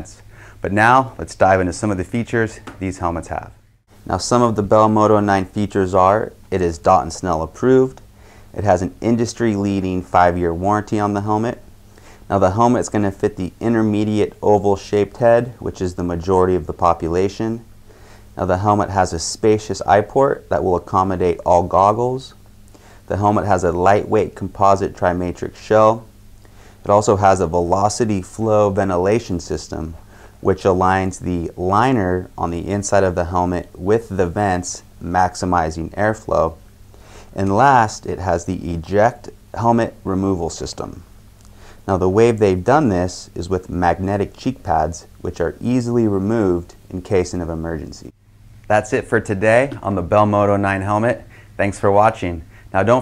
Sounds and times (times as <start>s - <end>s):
Speech: 0.0s - 11.7s, 12.3s - 17.7s, 18.4s - 22.4s, 23.1s - 26.1s, 26.8s - 36.6s, 37.3s - 41.1s, 41.8s - 53.0s.